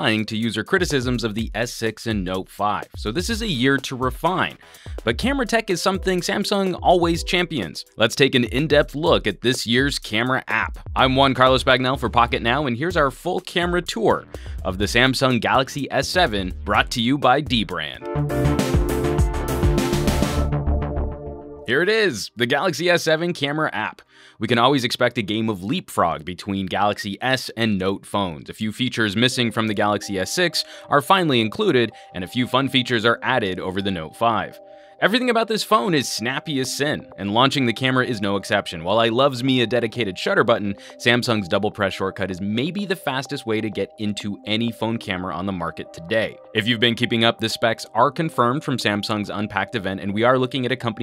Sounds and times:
Speech: 0.0s - 18.0s, 21.7s - 51.0s
Music: 0.0s - 51.0s.

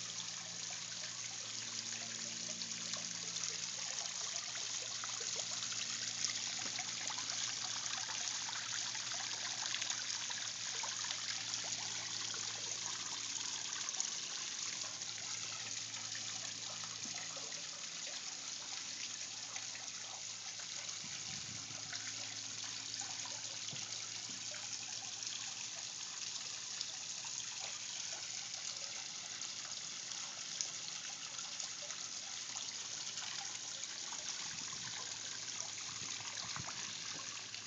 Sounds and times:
Stream: 0.0s - 37.6s.

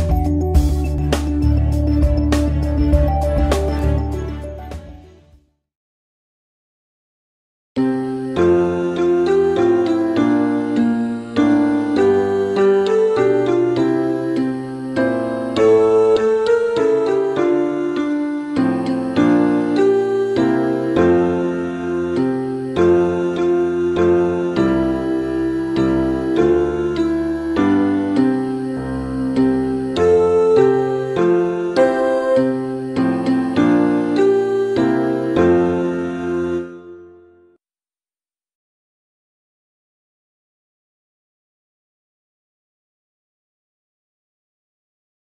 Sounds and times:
Music: 0.0s - 5.7s, 7.8s - 37.6s.

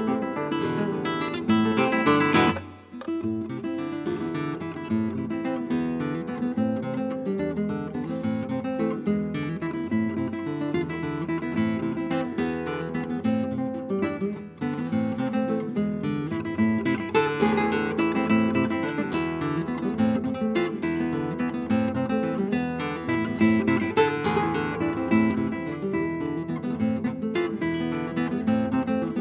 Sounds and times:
Strum: 0.0s - 29.2s.

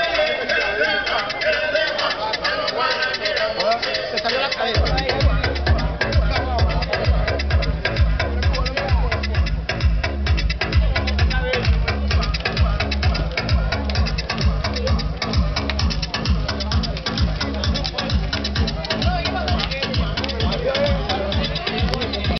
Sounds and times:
Music: 0.0s - 22.3s
Speech: 0.0s - 22.3s.

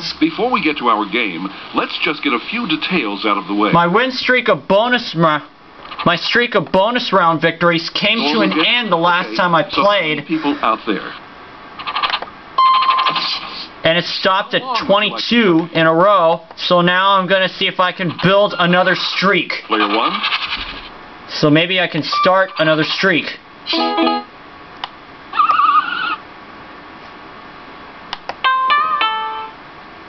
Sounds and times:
Speech: 0.0s - 11.2s, 13.8s - 20.3s, 21.3s - 23.4s.

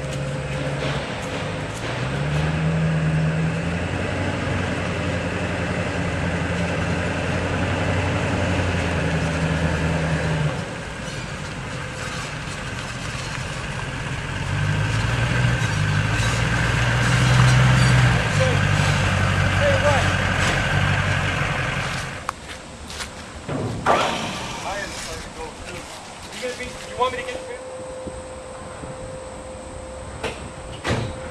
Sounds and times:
Vehicle: 0.0s - 31.3s
Speech: 18.3s - 18.7s, 19.6s - 20.1s, 24.6s - 27.6s.

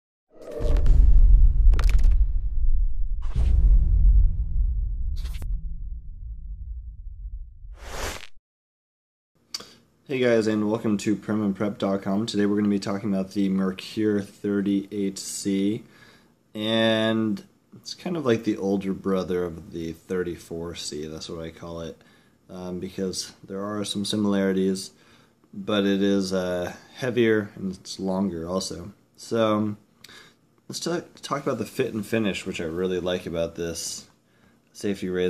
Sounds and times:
Whoosh, swoosh, swish: 3.1s - 3.9s, 5.0s - 5.7s, 7.7s - 8.4s.

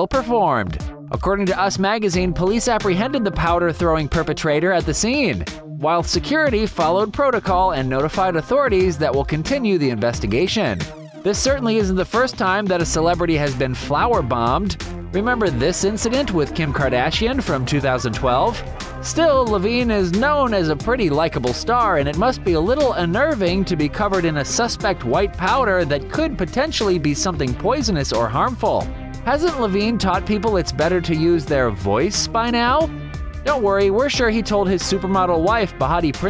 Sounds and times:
Speech: 0.0s - 32.9s, 33.5s - 36.3s
Music: 0.0s - 36.3s.

